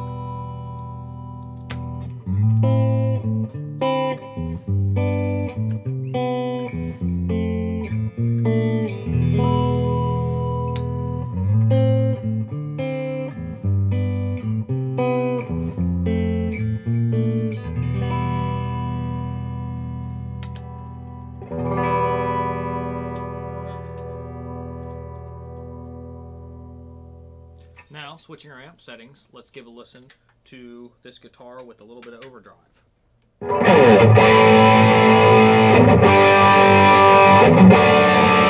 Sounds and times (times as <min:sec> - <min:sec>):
Electric guitar: 0:00.0 - 0:27.9, 0:33.4 - 0:38.5.